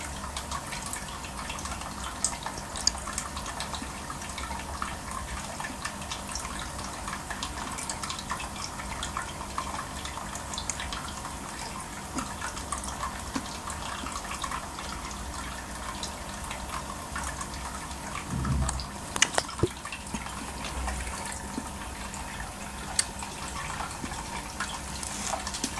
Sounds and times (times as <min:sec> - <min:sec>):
Gurgling: 0:18.3 - 0:19.8.